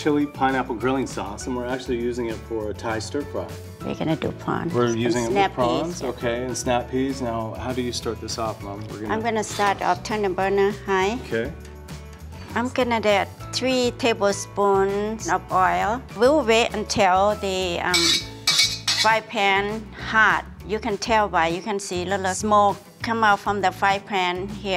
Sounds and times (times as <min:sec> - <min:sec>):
Stir: 0:17.9 - 0:19.2.